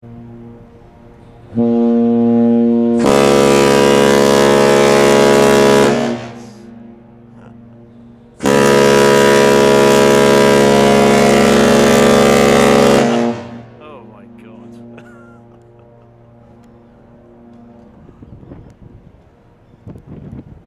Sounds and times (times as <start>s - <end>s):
Speech: 13.8s - 14.8s.